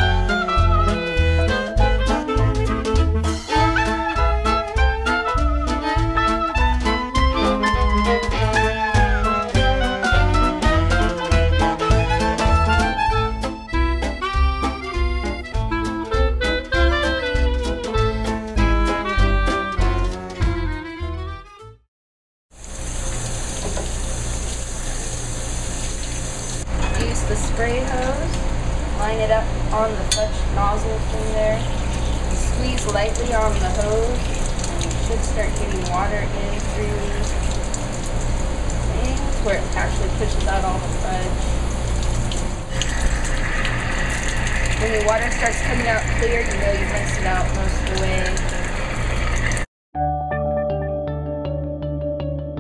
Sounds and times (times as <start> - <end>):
Water tap, faucet: 0.0 - 13.4, 22.6 - 26.7, 31.2 - 49.7
Water: 30.9 - 49.7.